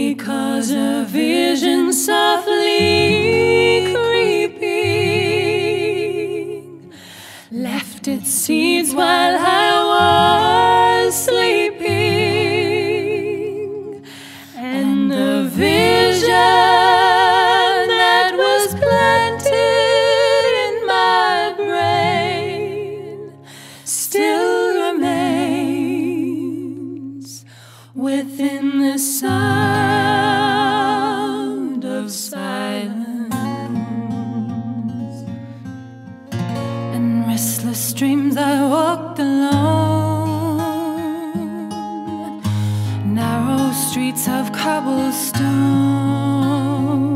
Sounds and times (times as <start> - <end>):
Music: 0.0 - 31.6, 33.3 - 47.1.